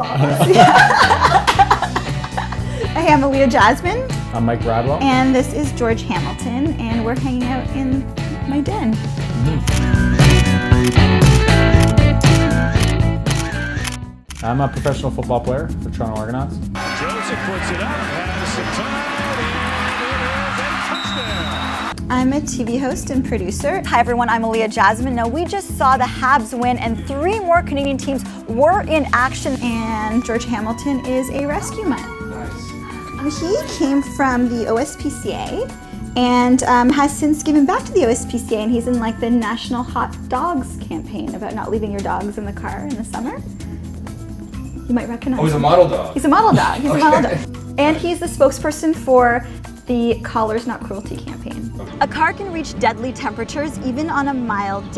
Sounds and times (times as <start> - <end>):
Music: 0.0 - 54.9.